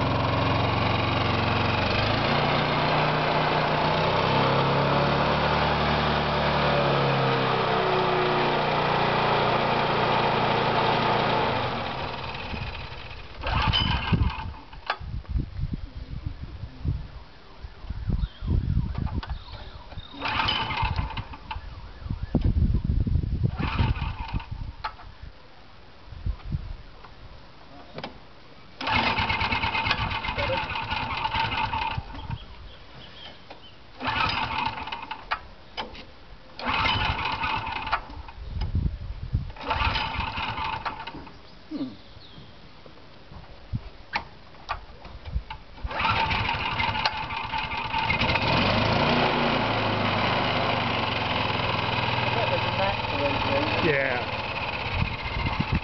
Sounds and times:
Engine: 0:00.0 - 0:15.1, 0:18.8 - 0:22.6, 0:23.4 - 0:25.1, 0:28.8 - 0:42.0, 0:43.4 - 0:55.8
Motorcycle: 0:00.0 - 0:15.3, 0:16.0 - 0:25.2, 0:28.8 - 0:42.0, 0:44.1 - 0:55.8.

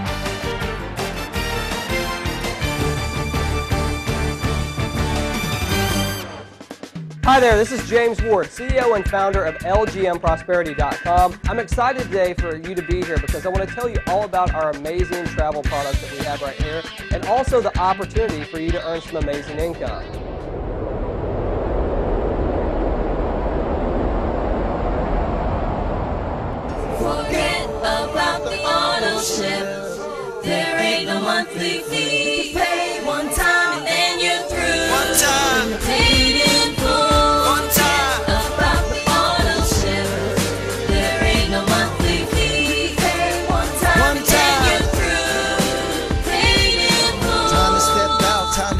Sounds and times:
Music: 0:00.0 - 0:20.3, 0:26.8 - 0:48.8
Speech: 0:07.2 - 0:20.1, 0:47.5 - 0:48.8.

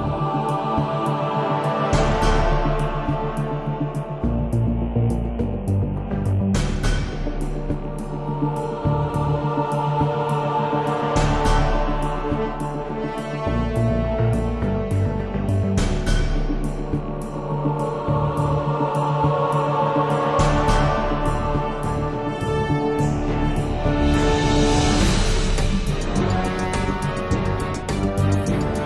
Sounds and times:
Music: 0:00.0 - 0:28.8.

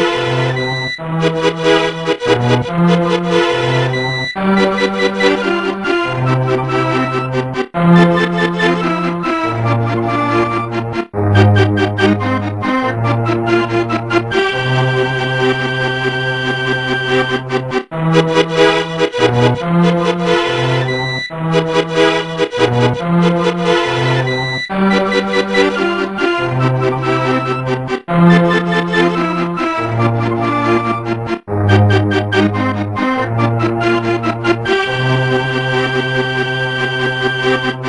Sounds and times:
Music: 0:00.0 - 0:37.8.

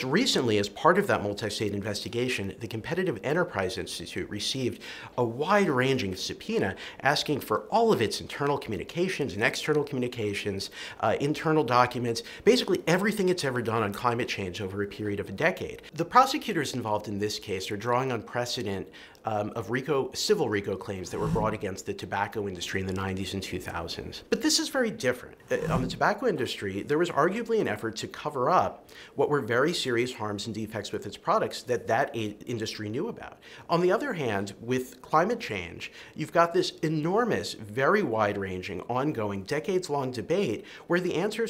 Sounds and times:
Male speech, man speaking: 0:00.0 - 0:41.4
Narration, monologue: 0:00.0 - 0:41.4.

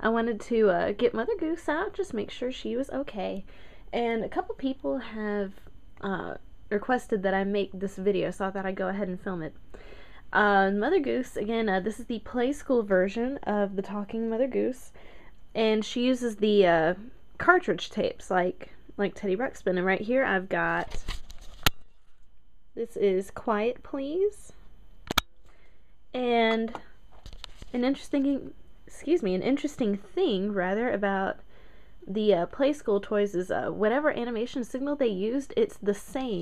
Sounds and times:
Speech: 0:00.0 - 0:09.6, 0:10.3 - 0:15.0, 0:15.6 - 0:21.0, 0:22.8 - 0:24.6, 0:26.2 - 0:26.9, 0:27.7 - 0:31.4, 0:32.1 - 0:36.4.

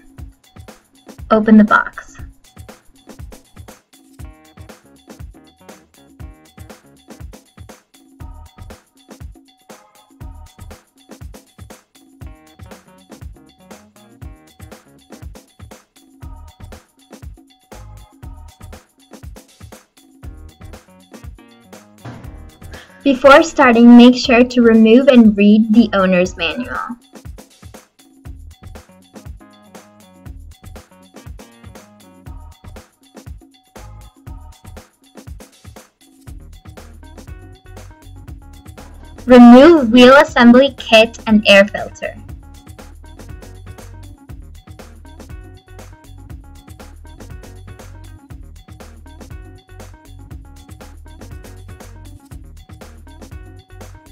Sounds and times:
Music: 0:00.0 - 0:54.1
Speech: 0:01.3 - 0:02.2, 0:22.8 - 0:27.0, 0:39.3 - 0:42.2.

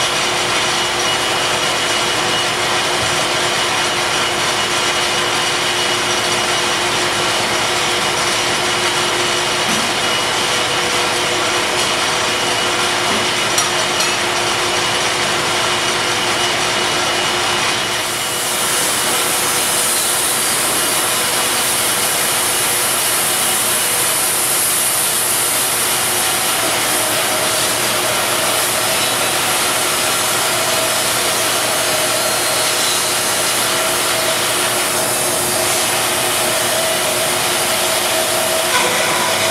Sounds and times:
Power tool: 0:00.0 - 0:39.5
Hiss: 0:18.0 - 0:39.5.

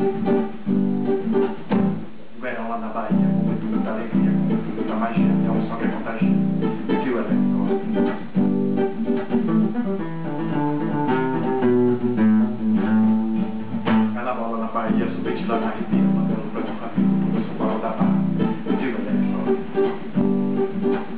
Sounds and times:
Acoustic guitar: 0:00.0 - 0:21.1
Strum: 0:00.0 - 0:21.1.

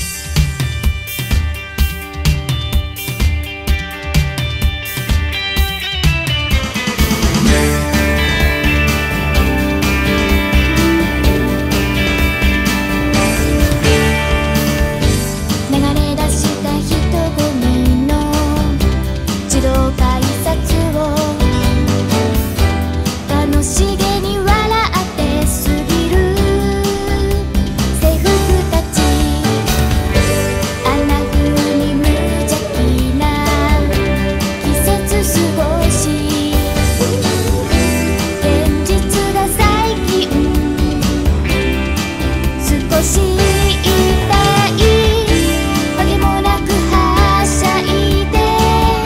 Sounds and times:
Music: 0:00.0 - 0:49.0.

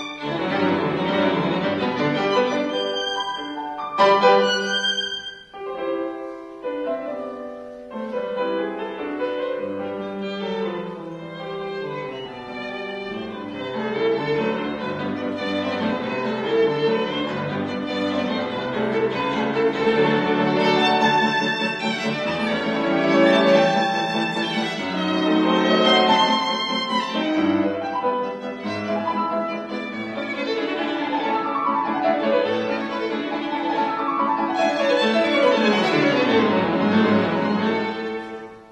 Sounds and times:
Violin, fiddle: 0:00.0 - 0:38.7.

